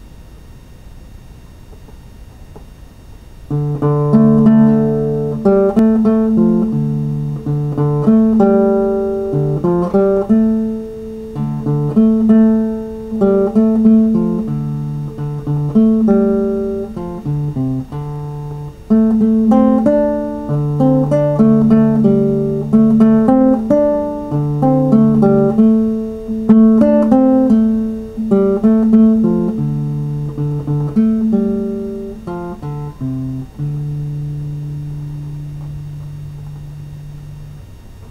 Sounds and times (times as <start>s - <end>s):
Acoustic guitar: 3.5s - 37.3s.